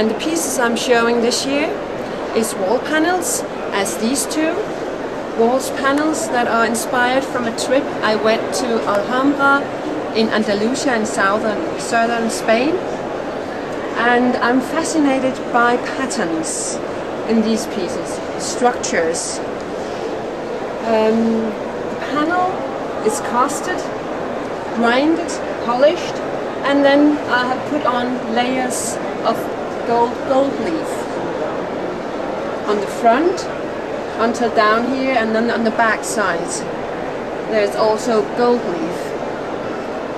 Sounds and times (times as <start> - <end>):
Speech: 0.0 - 4.7, 5.4 - 12.9, 14.0 - 19.4, 20.8 - 23.9, 24.8 - 31.2, 32.7 - 33.5, 34.1 - 36.7, 37.5 - 39.1.